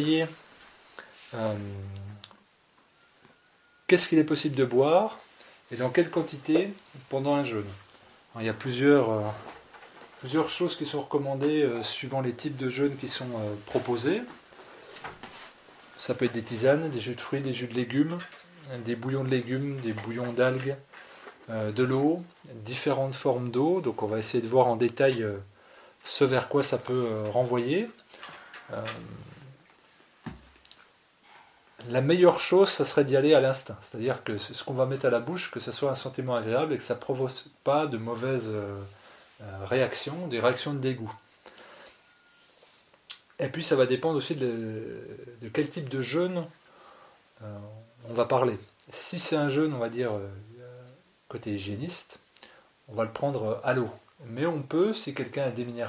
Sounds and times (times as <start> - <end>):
Speech: 0.0 - 0.5, 1.3 - 2.3, 3.9 - 9.6, 10.2 - 14.4, 16.0 - 20.9, 21.5 - 28.0, 28.7 - 29.6, 31.8 - 41.2, 43.4 - 46.6, 47.4 - 52.2, 52.9 - 55.8.